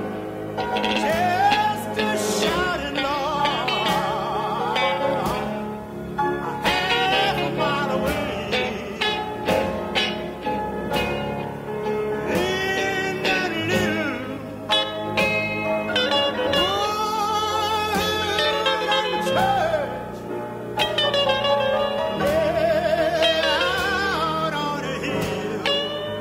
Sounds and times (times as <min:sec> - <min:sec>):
Country: 0:00.0 - 0:26.2.